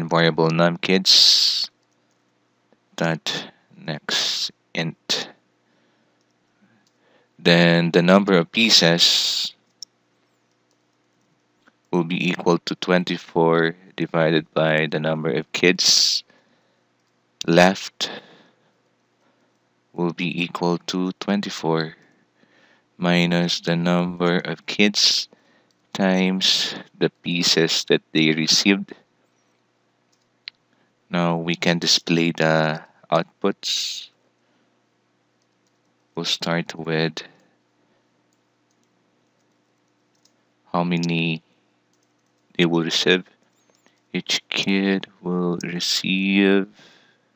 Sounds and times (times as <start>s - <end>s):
Speech: 0.0s - 1.8s, 3.0s - 5.4s, 7.4s - 9.6s, 12.0s - 16.3s, 17.4s - 18.3s, 20.0s - 22.0s, 23.0s - 25.3s, 26.0s - 29.0s, 31.1s - 34.2s, 36.2s - 37.4s, 40.7s - 41.4s, 42.6s - 43.3s, 44.2s - 46.8s
Inside, small room: 0.0s - 47.3s.